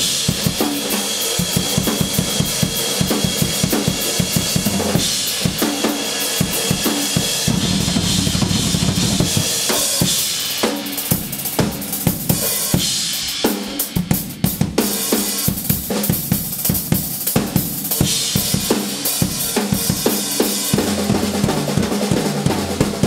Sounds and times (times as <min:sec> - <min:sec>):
Drum kit: 0:00.0 - 0:23.0
Drum roll: 0:00.0 - 0:23.0
Bass drum: 0:04.2 - 0:05.6, 0:07.3 - 0:09.7.